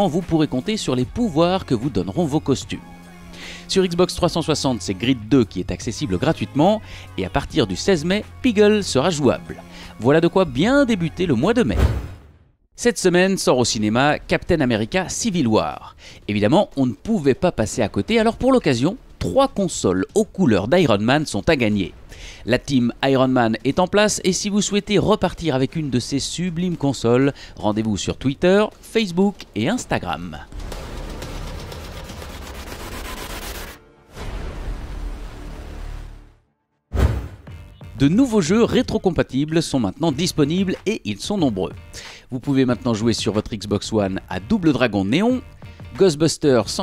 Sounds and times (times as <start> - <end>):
Speech: 0.0 - 2.9, 3.7 - 11.9, 12.8 - 30.5, 38.0 - 46.8.